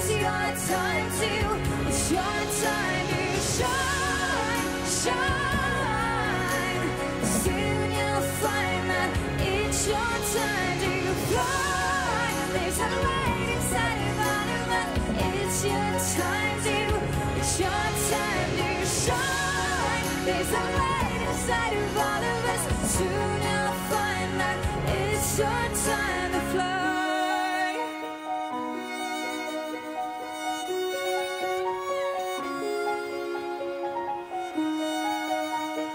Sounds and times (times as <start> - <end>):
Singing: 0.0 - 28.3
Violin, fiddle: 0.0 - 35.9.